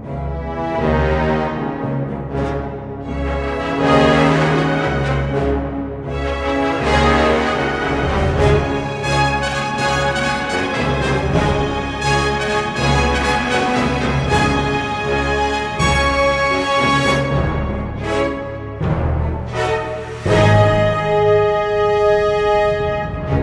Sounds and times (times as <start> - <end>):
Music: 0.0 - 23.4.